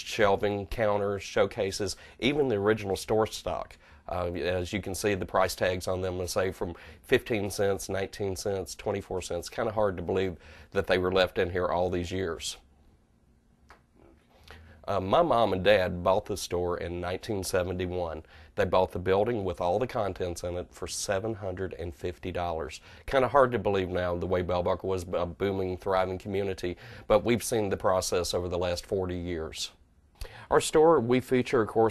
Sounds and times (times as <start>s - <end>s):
Speech: 0.0s - 12.7s, 14.8s - 29.8s, 30.5s - 31.9s.